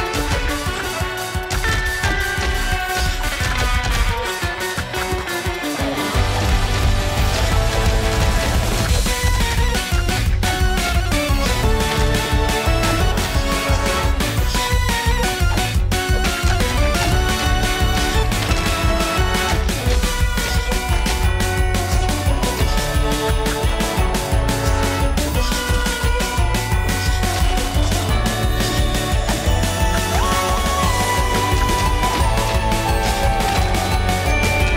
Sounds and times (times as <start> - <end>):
Music: 0.0 - 34.7.